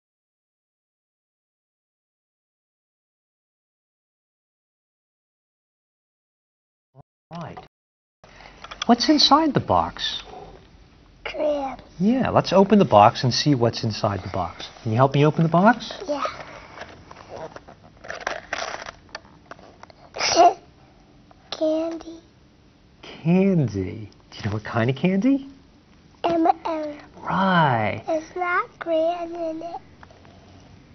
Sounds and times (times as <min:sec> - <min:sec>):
Inside, small room: 0:07.3 - 0:30.9.